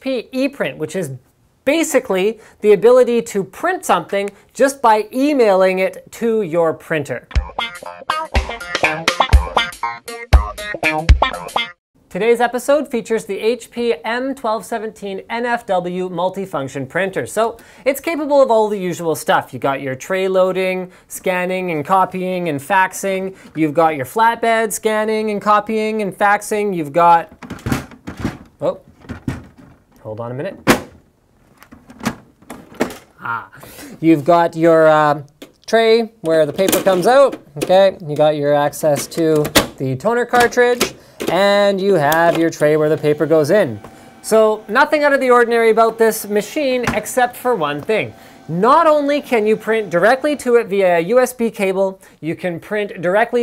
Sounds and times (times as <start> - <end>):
Speech: 0.0 - 7.3, 12.1 - 27.3, 28.6 - 28.8, 30.0 - 30.6, 33.2 - 53.4
Music: 7.3 - 11.8.